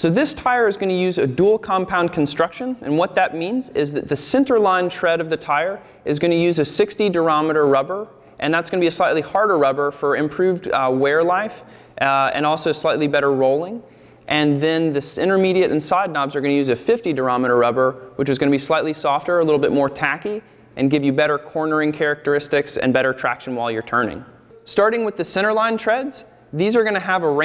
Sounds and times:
Speech: 0.0s - 27.4s.

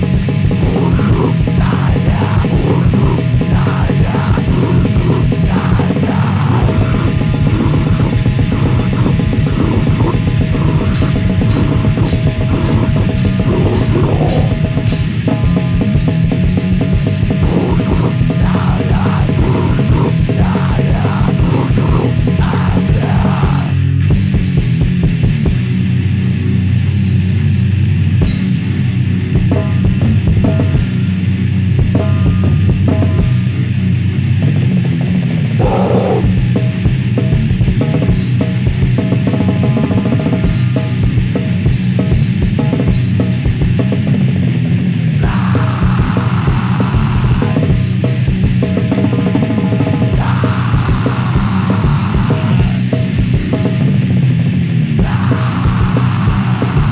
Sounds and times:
Hum: 0.0s - 39.5s, 40.4s - 56.9s
Throbbing: 0.0s - 56.9s.

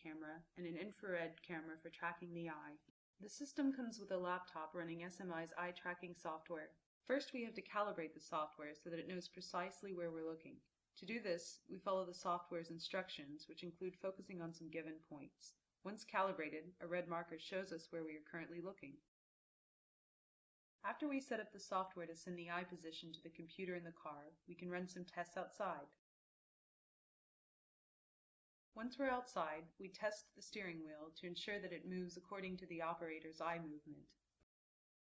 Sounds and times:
Speech: 0.0s - 19.1s, 20.8s - 26.0s, 28.8s - 34.2s.

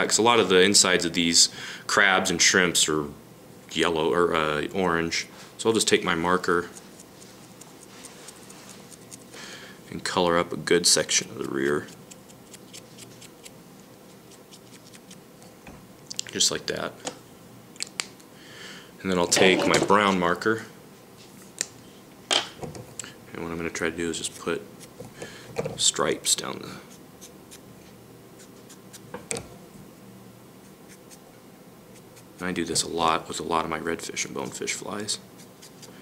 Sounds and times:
Speech: 0.0s - 6.8s, 9.9s - 12.0s, 16.2s - 17.1s, 19.0s - 20.7s, 23.3s - 24.7s, 25.8s - 26.9s, 32.4s - 35.3s.

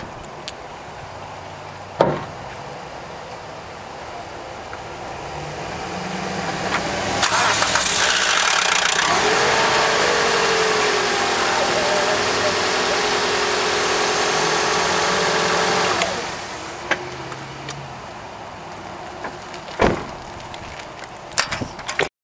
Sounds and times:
Vibration: 6.1s - 16.2s.

